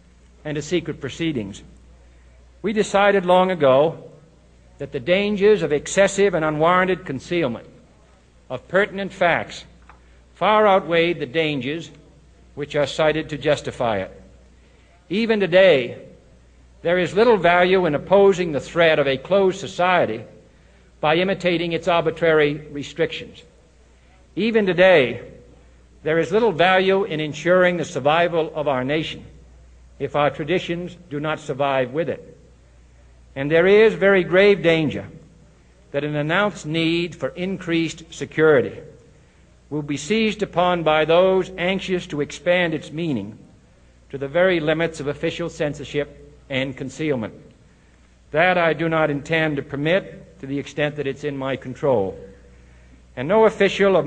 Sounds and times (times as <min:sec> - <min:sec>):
Narration, monologue: 0:00.0 - 0:54.0
Male speech, man speaking: 0:00.4 - 0:01.7, 0:02.6 - 0:04.2, 0:04.8 - 0:07.8, 0:08.5 - 0:09.8, 0:10.4 - 0:14.3, 0:15.1 - 0:16.2, 0:16.8 - 0:20.4, 0:21.0 - 0:23.5, 0:24.4 - 0:29.4, 0:30.0 - 0:32.4, 0:33.4 - 0:35.2, 0:35.9 - 0:39.0, 0:39.7 - 0:43.4, 0:44.1 - 0:47.5, 0:48.3 - 0:52.4, 0:53.2 - 0:54.0.